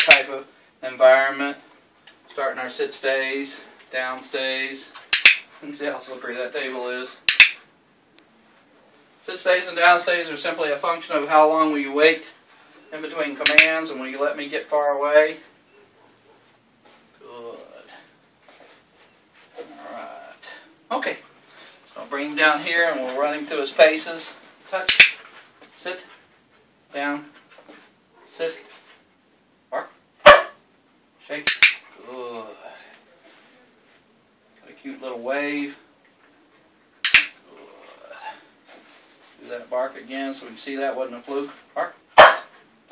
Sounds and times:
Speech: 0:00.0 - 0:01.7, 0:02.3 - 0:05.0, 0:05.6 - 0:07.2, 0:09.2 - 0:15.5, 0:22.0 - 0:24.9, 0:26.9 - 0:27.4, 0:28.3 - 0:28.7, 0:34.6 - 0:35.8, 0:39.4 - 0:42.0
Bow-wow: 0:29.8 - 0:30.6, 0:41.8 - 0:42.5.

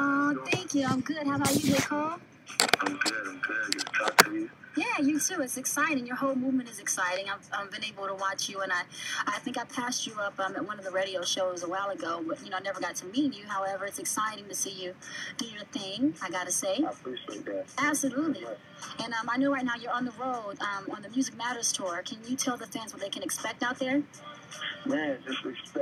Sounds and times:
Speech: 0:00.0 - 0:25.8.

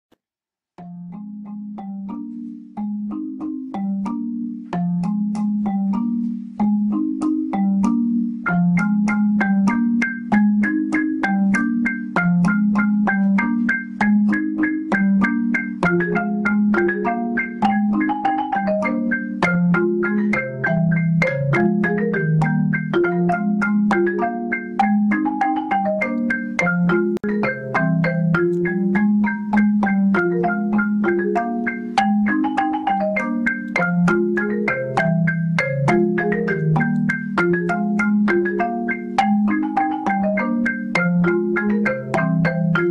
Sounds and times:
Vibraphone: 0:00.8 - 0:42.9.

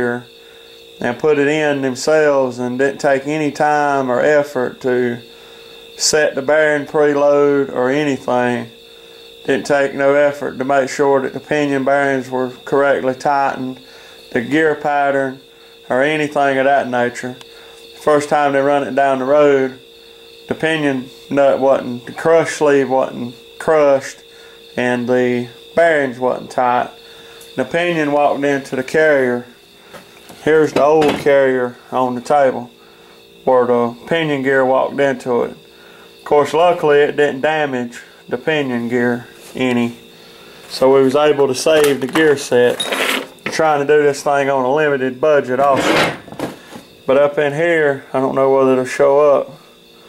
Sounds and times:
Speech: 0:00.0 - 0:00.3, 0:01.0 - 0:05.2, 0:06.0 - 0:08.7, 0:09.5 - 0:17.4, 0:18.0 - 0:19.8, 0:20.5 - 0:24.2, 0:24.8 - 0:26.9, 0:27.6 - 0:29.5, 0:30.4 - 0:32.7, 0:33.4 - 0:35.6, 0:36.2 - 0:40.0, 0:40.7 - 0:42.8, 0:43.5 - 0:46.2, 0:47.1 - 0:49.6.

